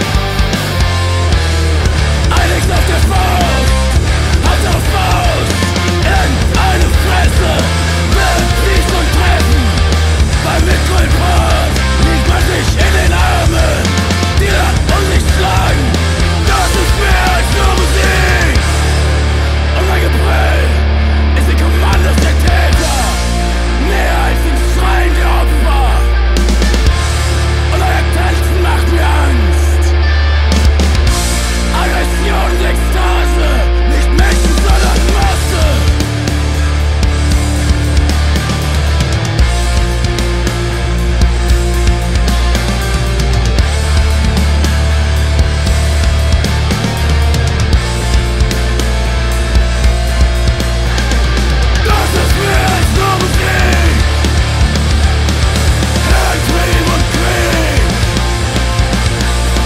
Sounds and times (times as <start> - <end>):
Music: 0.0 - 59.6.